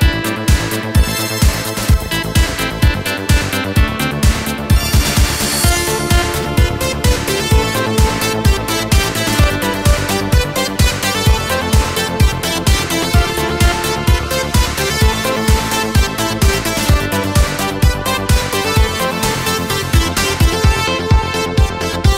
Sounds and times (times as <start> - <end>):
Music: 0.0 - 22.1.